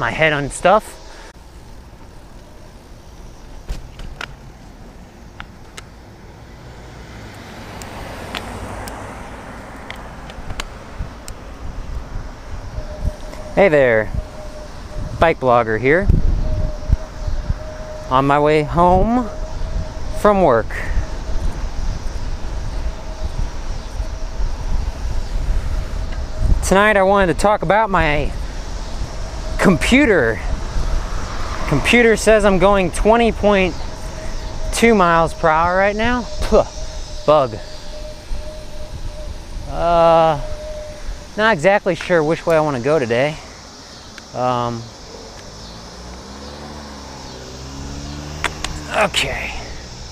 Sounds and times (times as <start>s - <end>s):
Speech: 0.0s - 1.0s, 13.6s - 14.2s, 15.2s - 16.1s, 18.1s - 19.4s, 20.2s - 21.0s, 26.6s - 28.4s, 29.6s - 30.5s, 31.7s - 33.8s, 34.7s - 36.7s, 37.3s - 37.6s, 39.7s - 40.4s, 41.4s - 43.5s, 44.4s - 44.9s, 48.8s - 49.8s
Bicycle: 0.2s - 50.1s.